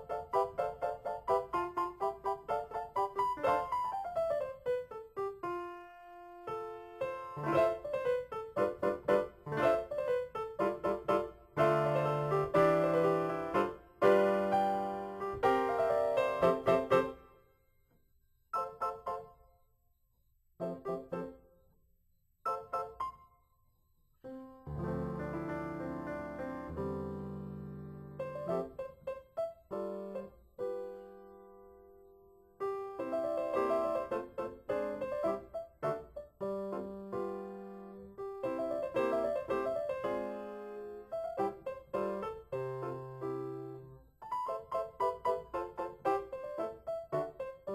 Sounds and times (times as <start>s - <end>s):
Music: 0.0s - 47.7s.